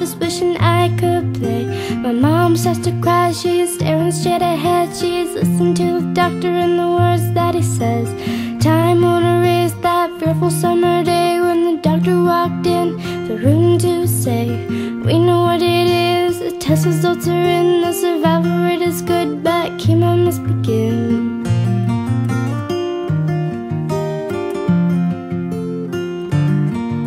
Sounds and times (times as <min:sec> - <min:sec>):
Music: 0:00.0 - 0:27.0.